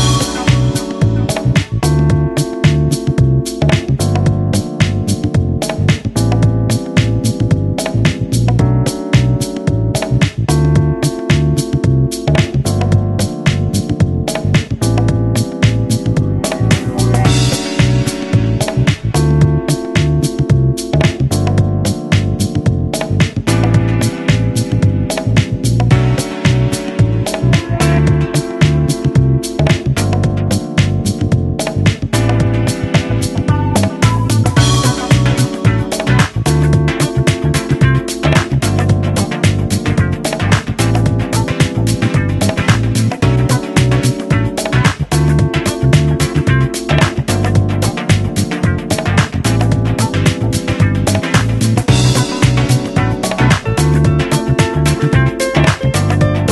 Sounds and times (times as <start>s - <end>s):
Music: 0.0s - 56.5s.